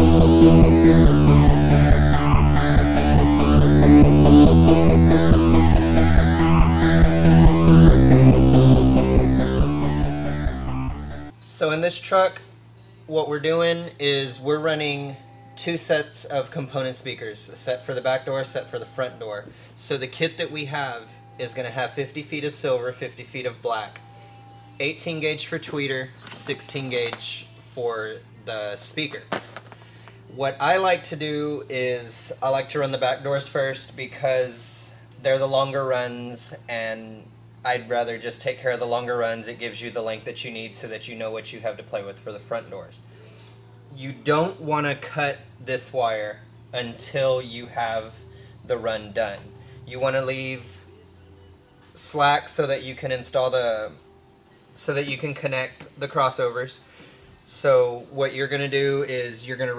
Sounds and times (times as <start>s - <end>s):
Speech: 11.4s - 12.5s, 13.1s - 24.0s, 24.8s - 29.3s, 30.4s - 43.1s, 43.9s - 50.9s, 51.9s - 54.0s, 54.8s - 56.8s, 57.5s - 59.7s.